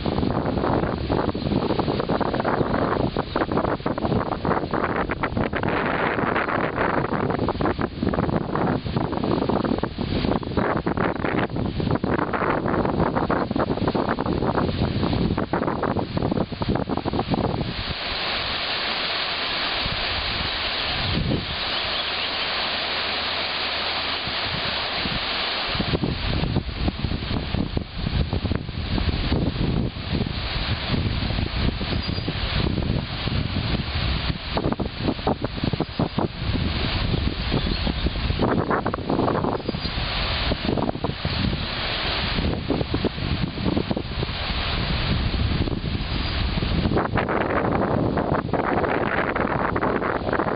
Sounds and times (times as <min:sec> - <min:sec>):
Wind noise (microphone): 0:00.0 - 0:19.0, 0:19.6 - 0:22.1, 0:24.2 - 0:50.5.